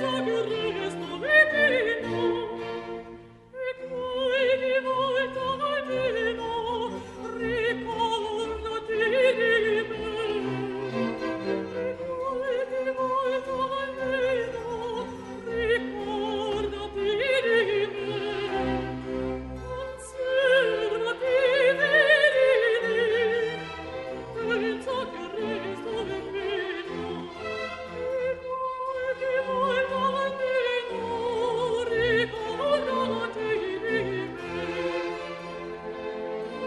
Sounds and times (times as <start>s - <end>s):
Opera: 0.0s - 36.6s
Orchestra: 0.0s - 36.6s
Violin, fiddle: 0.0s - 36.6s.